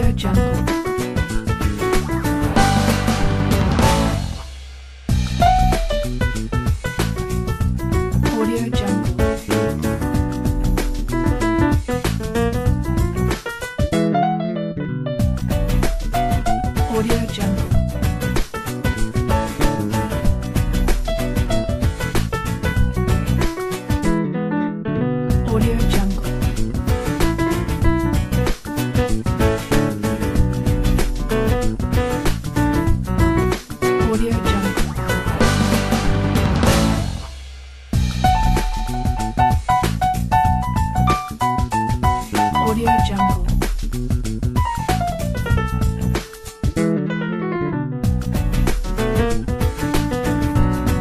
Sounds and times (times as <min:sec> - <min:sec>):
Speech: 0:00.0 - 0:00.6, 0:08.3 - 0:09.2, 0:16.9 - 0:17.7, 0:25.4 - 0:26.3, 0:34.0 - 0:35.4, 0:42.4 - 0:43.6
Theme music: 0:02.1 - 0:06.4, 0:34.7 - 0:41.6.